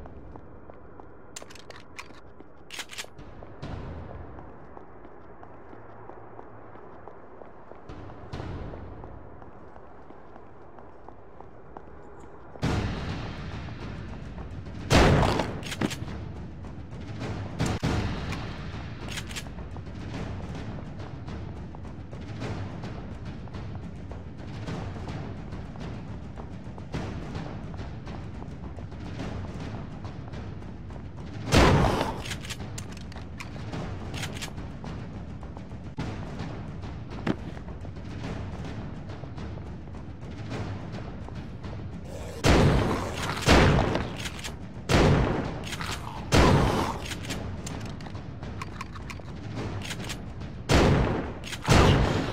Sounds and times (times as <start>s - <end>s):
Fusillade: 14.9s - 16.1s, 31.5s - 32.6s, 42.1s - 47.4s, 49.7s - 52.3s.